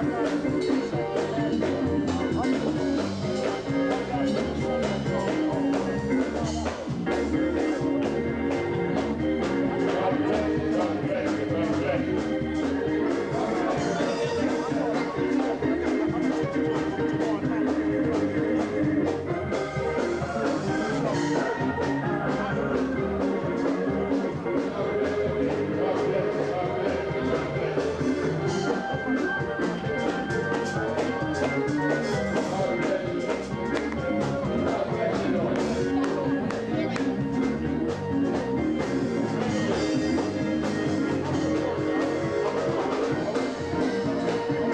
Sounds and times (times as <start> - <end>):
Pop music: 0.0 - 44.7
Rhythm and blues: 0.0 - 44.7
Speech: 0.0 - 44.7.